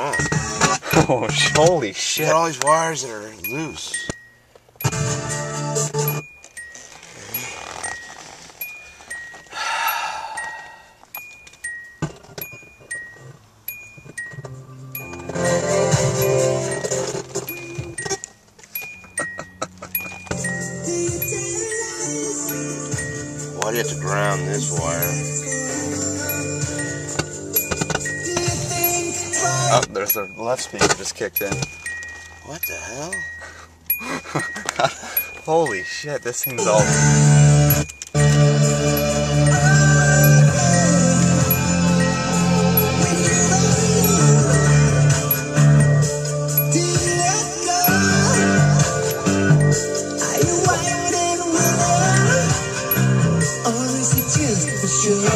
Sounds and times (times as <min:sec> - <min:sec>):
Outside, rural or natural: 0:00.0 - 0:55.3
Speech: 0:01.0 - 0:04.0, 0:23.6 - 0:25.2, 0:29.7 - 0:31.7, 0:32.4 - 0:33.2, 0:35.5 - 0:36.9
Doorbell: 0:03.5 - 0:55.3
Music: 0:04.8 - 0:06.2, 0:14.3 - 0:18.1, 0:20.2 - 0:30.2, 0:36.6 - 0:55.3.